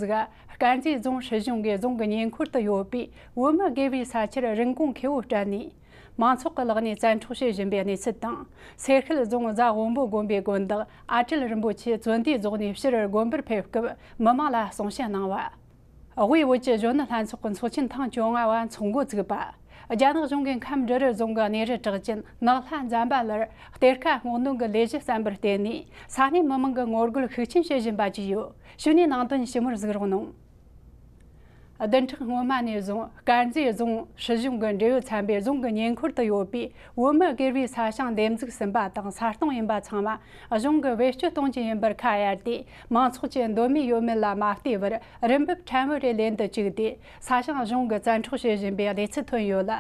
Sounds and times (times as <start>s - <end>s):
Speech: 0.0s - 15.6s, 16.2s - 30.4s, 31.8s - 49.8s.